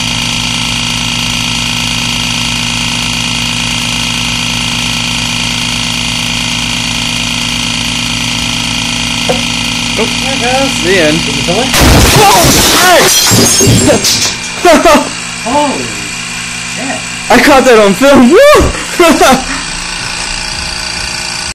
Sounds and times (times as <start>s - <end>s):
Speech: 10.0s - 13.1s, 14.7s - 16.1s, 16.7s - 19.4s
Burst, pop: 11.8s - 13.8s.